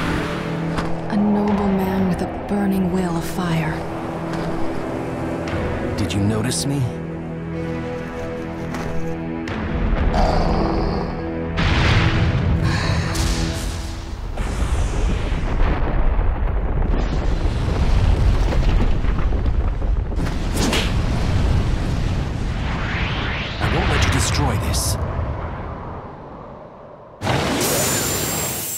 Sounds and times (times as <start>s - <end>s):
Music: 0.0s - 15.6s
Speech: 1.1s - 3.8s, 6.0s - 7.0s, 23.6s - 25.0s.